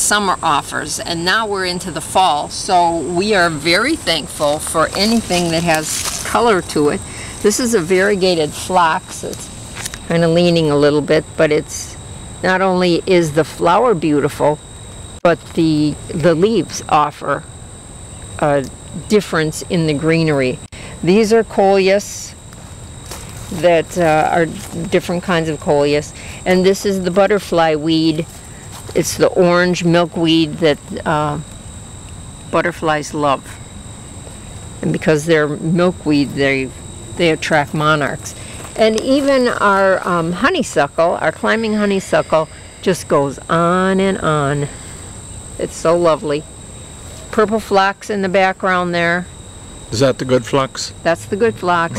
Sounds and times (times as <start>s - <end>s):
Speech: 0.0s - 9.4s, 10.1s - 14.6s, 15.3s - 17.4s, 18.4s - 22.4s, 23.6s - 28.3s, 29.0s - 31.4s, 32.6s - 33.6s, 34.8s - 44.7s, 45.6s - 46.4s, 47.4s - 49.3s, 50.0s - 51.9s
Outside, rural or natural: 0.0s - 51.9s.